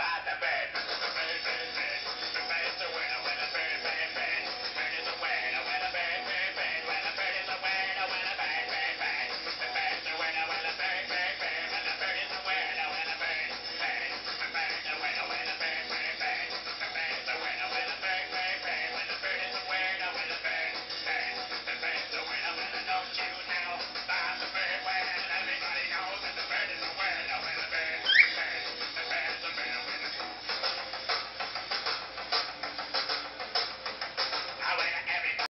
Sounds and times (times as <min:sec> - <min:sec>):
Music: 0:00.0 - 0:35.5
Bird: 0:28.0 - 0:28.4.